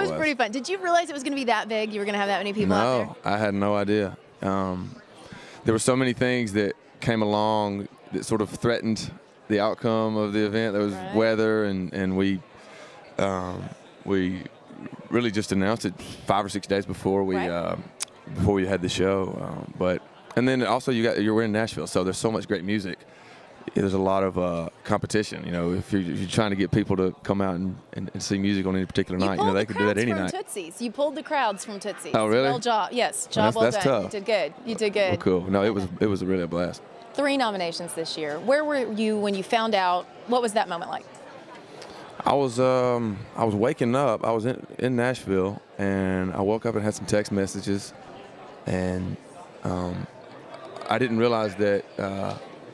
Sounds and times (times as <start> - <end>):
Speech: 0.0 - 0.5, 1.9 - 5.0, 13.2 - 23.0, 23.7 - 30.7, 31.6 - 36.8, 42.2 - 47.9, 48.7 - 50.1, 50.9 - 52.4.